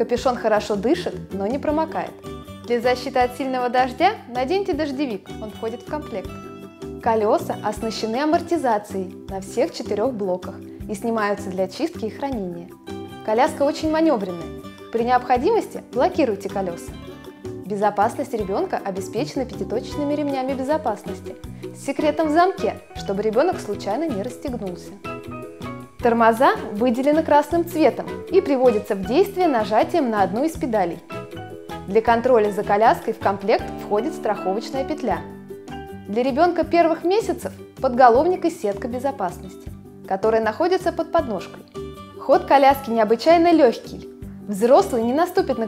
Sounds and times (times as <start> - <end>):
Speech: 0.0 - 6.3, 7.0 - 12.7, 13.3 - 17.0, 17.7 - 25.0, 26.0 - 31.0, 31.9 - 35.2, 36.1 - 41.6, 42.2 - 45.6
Music: 0.0 - 45.6.